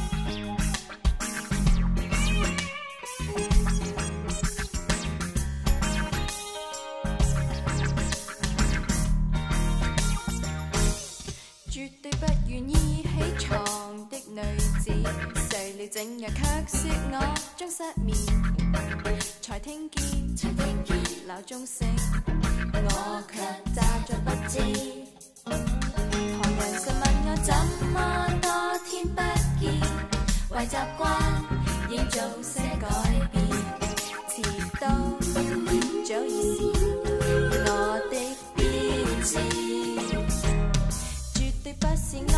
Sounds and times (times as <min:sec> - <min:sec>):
Jazz: 0:00.0 - 0:11.4, 0:12.2 - 0:19.4, 0:20.0 - 0:42.3
Funny music: 0:00.0 - 0:42.3.